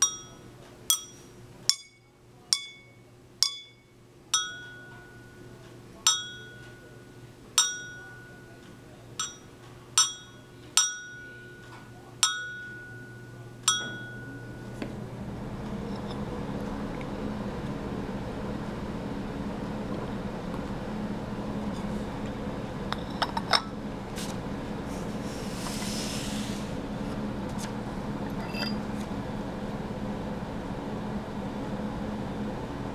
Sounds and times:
Chink, clink: 0:00.0 - 0:05.4, 0:06.1 - 0:06.8, 0:07.6 - 0:08.5, 0:09.2 - 0:14.5
Speech: 0:02.0 - 0:03.3, 0:04.5 - 0:14.8.

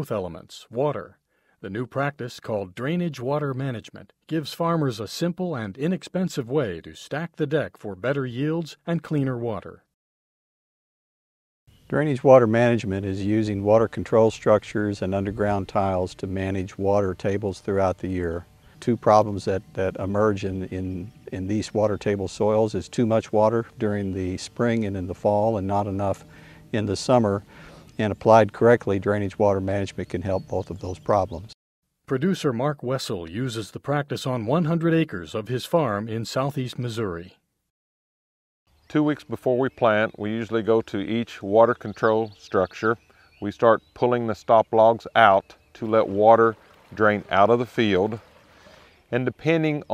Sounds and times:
Speech: 0:00.0 - 0:09.9, 0:11.9 - 0:27.4, 0:28.0 - 0:37.4, 0:38.9 - 0:48.2, 0:49.1 - 0:49.9.

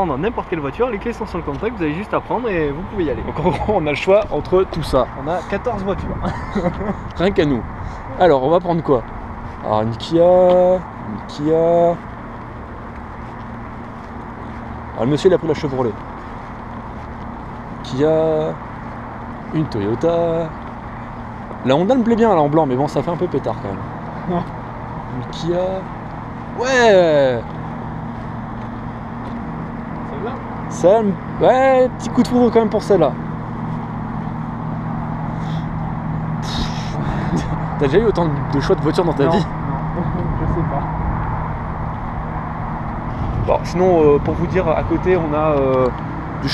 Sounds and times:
Speech: 0:00.0 - 0:06.3, 0:09.6 - 0:12.0, 0:15.0 - 0:16.0, 0:17.8 - 0:18.6, 0:19.5 - 0:20.6, 0:21.6 - 0:24.5, 0:25.1 - 0:25.9, 0:26.6 - 0:27.5, 0:30.1 - 0:33.2, 0:36.4 - 0:40.9, 0:43.5 - 0:46.5
Vehicle: 0:00.0 - 0:46.5.

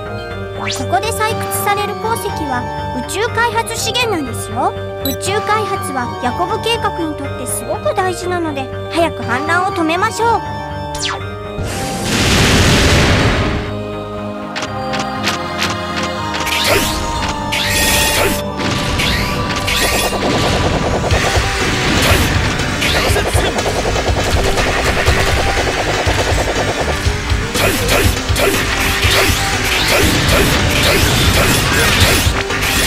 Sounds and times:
Music: 0:00.0 - 0:32.8
Speech: 0:00.8 - 0:10.4.

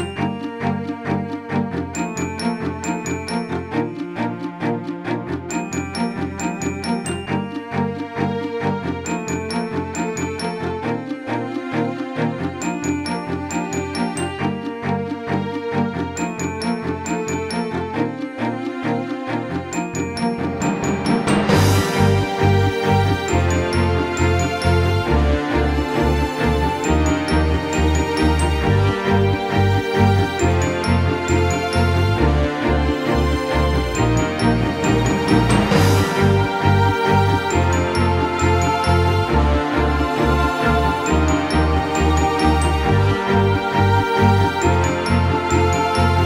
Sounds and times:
Music: 0:00.0 - 0:46.2.

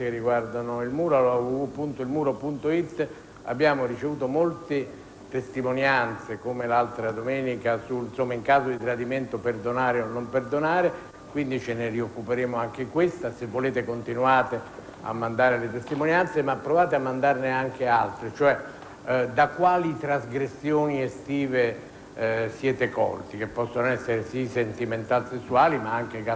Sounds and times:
Speech: 0:00.0 - 0:26.3.

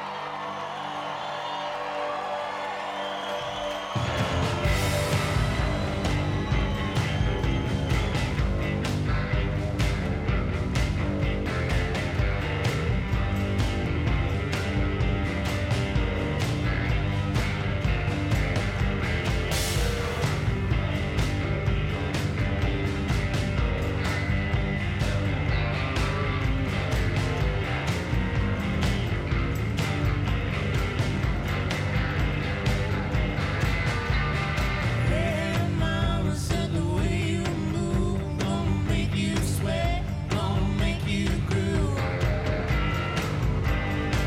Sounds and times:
Music: 0:00.0 - 0:44.2.

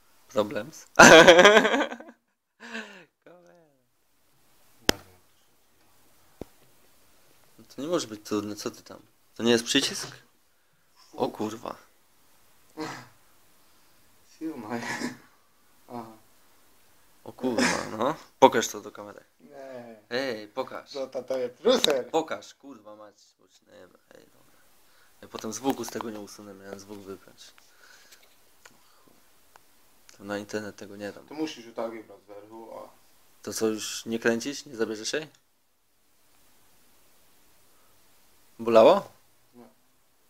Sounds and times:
Inside, small room: 0:00.0 - 0:40.2.

